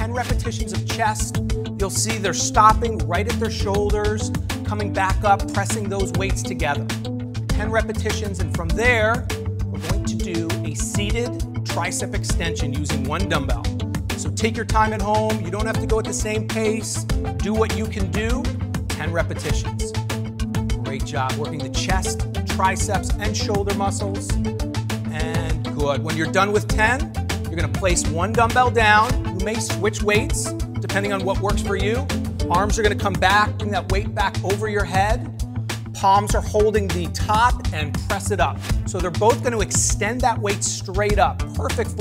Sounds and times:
Speech: 0:00.0 - 0:06.9, 0:07.6 - 0:09.2, 0:09.8 - 0:20.0, 0:20.9 - 0:24.4, 0:25.1 - 0:35.2, 0:36.0 - 0:42.0
Music: 0:00.0 - 0:42.0.

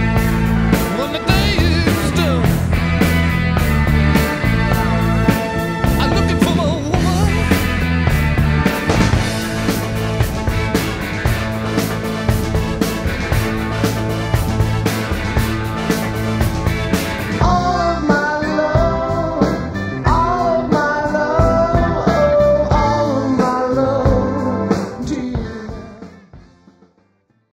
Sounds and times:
Music: 0:00.0 - 0:27.5.

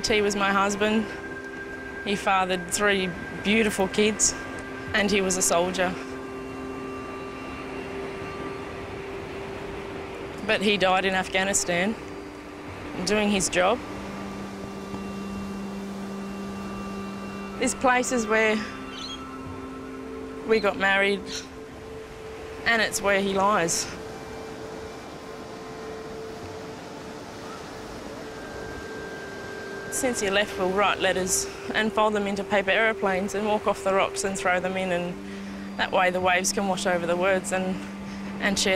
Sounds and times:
Speech: 0:00.0 - 0:01.1, 0:02.1 - 0:04.4, 0:05.0 - 0:06.0, 0:10.4 - 0:12.0, 0:13.0 - 0:13.8, 0:17.6 - 0:18.7, 0:20.5 - 0:21.4, 0:22.7 - 0:24.0, 0:30.0 - 0:35.2, 0:35.8 - 0:37.8, 0:38.4 - 0:38.7
Music: 0:00.0 - 0:38.7.

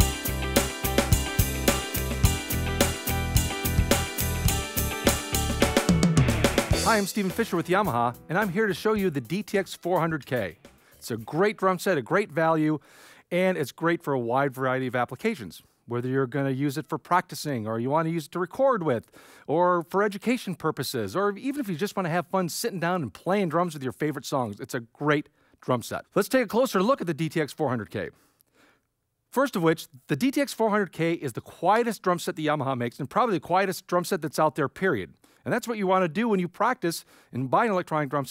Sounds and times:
Music: 0:00.0 - 0:11.8
Speech: 0:06.8 - 0:28.2, 0:29.3 - 0:38.3.

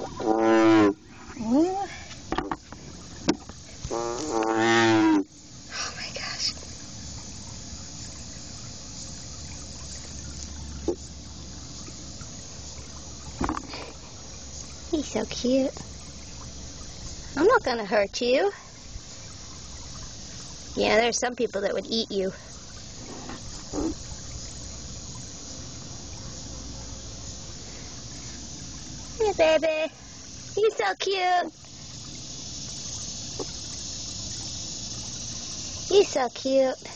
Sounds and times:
Speech: 0:17.4 - 0:18.6, 0:20.8 - 0:22.4, 0:30.6 - 0:31.5, 0:35.9 - 0:36.9.

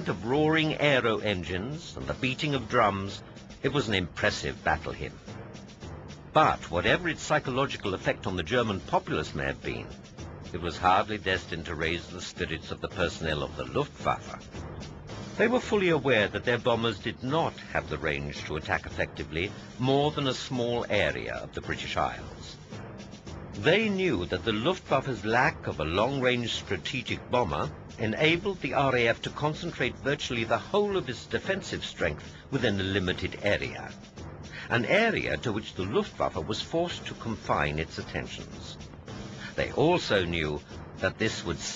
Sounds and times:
Speech: 0:00.0 - 0:05.2, 0:06.4 - 0:14.5, 0:15.4 - 0:22.6, 0:23.6 - 0:34.0, 0:34.6 - 0:38.8, 0:39.5 - 0:41.7
Music: 0:00.0 - 0:41.7.

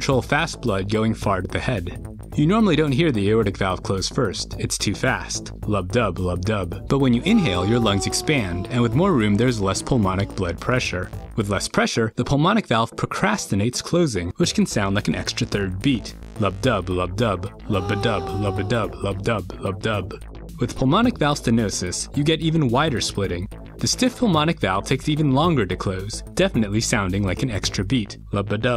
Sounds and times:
Music: 0:00.0 - 0:28.7
Speech: 0:00.0 - 0:28.7.

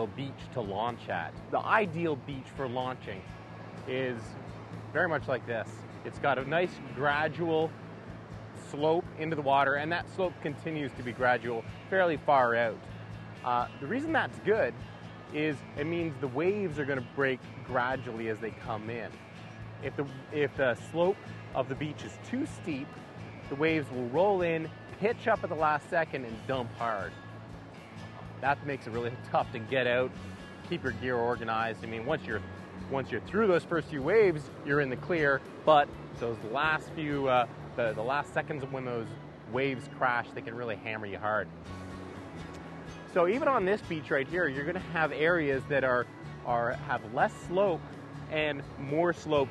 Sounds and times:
Speech: 0:00.0 - 0:03.3, 0:03.9 - 0:04.4, 0:05.0 - 0:07.7, 0:08.6 - 0:12.8, 0:13.4 - 0:14.8, 0:15.4 - 0:19.2, 0:19.8 - 0:22.9, 0:23.5 - 0:27.1, 0:28.4 - 0:30.1, 0:30.7 - 0:41.5, 0:43.2 - 0:49.5
Music: 0:00.0 - 0:49.5.

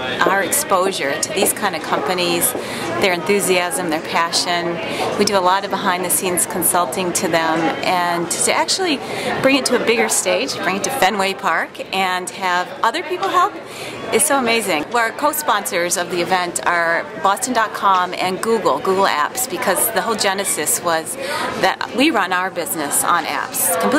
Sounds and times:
Speech: 0:00.0 - 0:23.9.

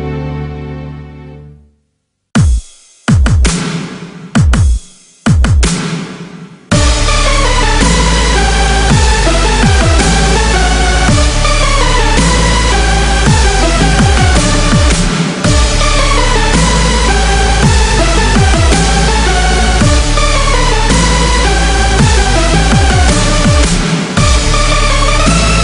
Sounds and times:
Music: 0:00.0 - 0:25.6.

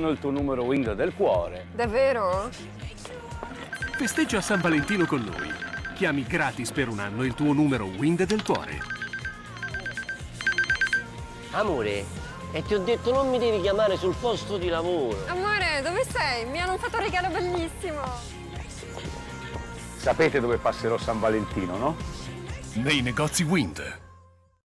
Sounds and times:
Music: 0:00.0 - 0:24.6.

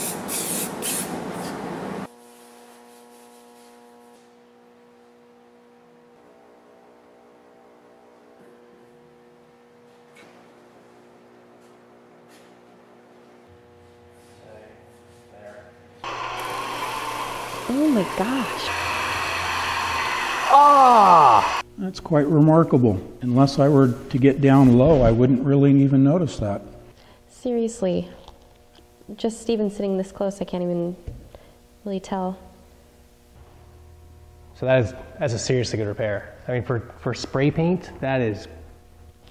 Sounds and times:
Speech: 0:14.4 - 0:15.8, 0:21.8 - 0:26.7, 0:34.6 - 0:38.6.

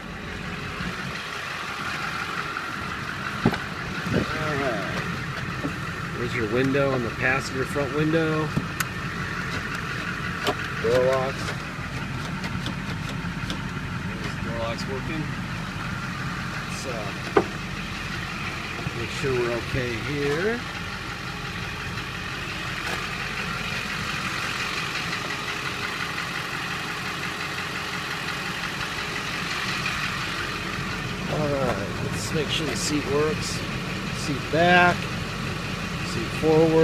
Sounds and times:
Motor vehicle (road): 0:00.0 - 0:36.8.

